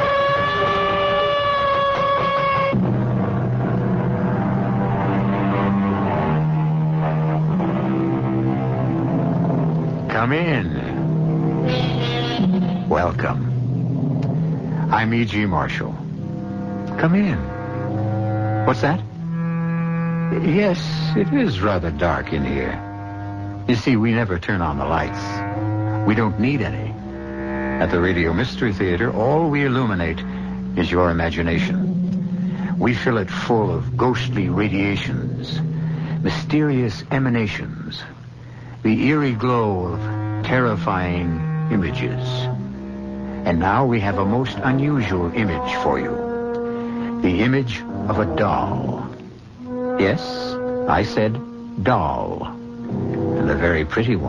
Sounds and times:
Music: 0.0 - 54.2
Speech: 10.1 - 11.0, 12.9 - 13.5, 14.9 - 16.0, 16.9 - 17.5, 18.7 - 19.0, 20.3 - 22.8, 23.7 - 25.4, 26.1 - 27.0, 27.8 - 31.8, 32.8 - 35.6, 36.2 - 38.2, 38.8 - 42.5, 43.5 - 46.2, 47.2 - 49.2, 50.0 - 52.6, 53.4 - 54.2.

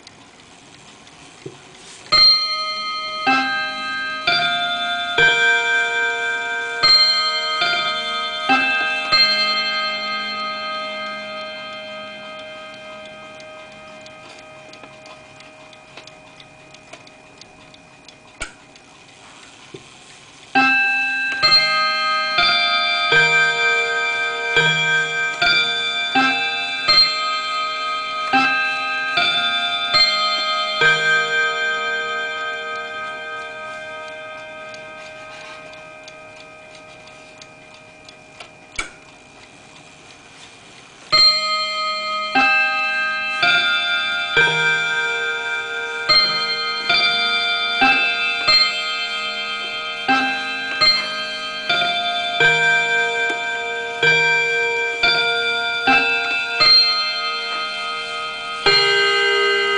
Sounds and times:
Clock: 0.0 - 59.7.

